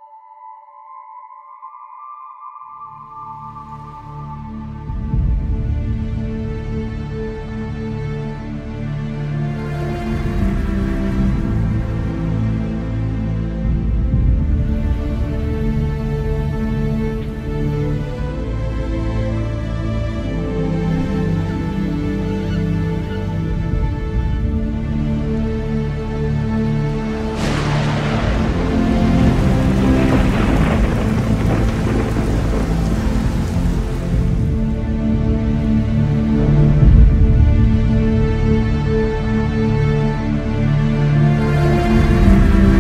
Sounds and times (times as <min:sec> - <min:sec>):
Music: 0:00.0 - 0:42.8.